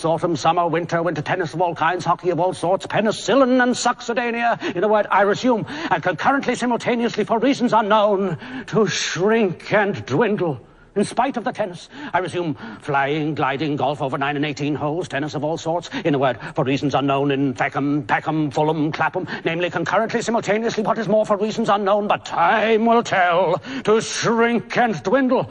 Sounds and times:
Male speech, man speaking: 0:00.0 - 0:25.5.

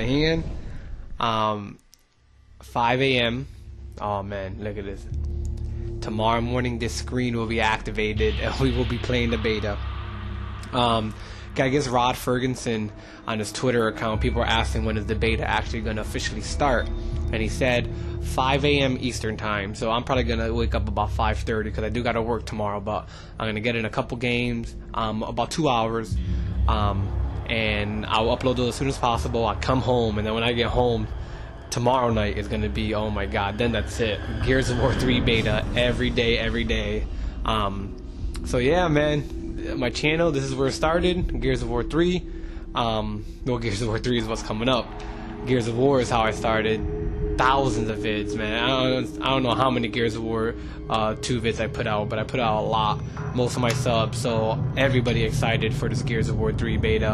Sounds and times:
Speech: 0:00.0 - 0:00.6, 0:01.2 - 0:01.8, 0:02.6 - 0:05.2, 0:06.0 - 0:10.0, 0:10.7 - 0:57.1
Music: 0:00.0 - 0:57.1.

